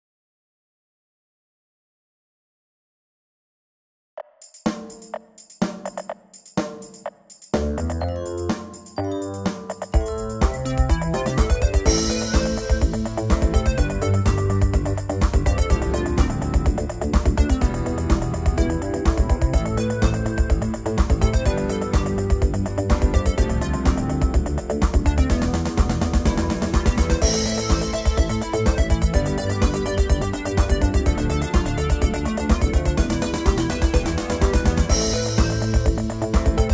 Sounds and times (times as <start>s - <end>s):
Music: 4.2s - 36.7s.